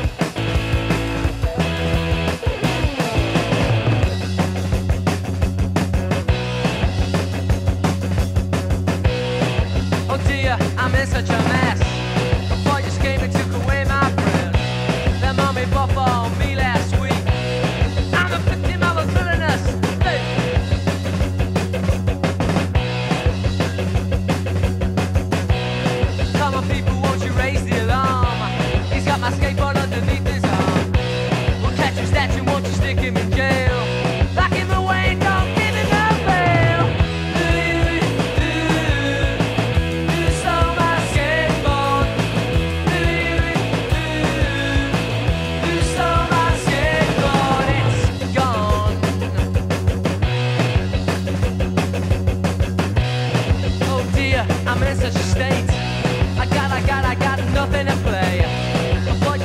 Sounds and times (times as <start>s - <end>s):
Music: 0.0s - 59.4s.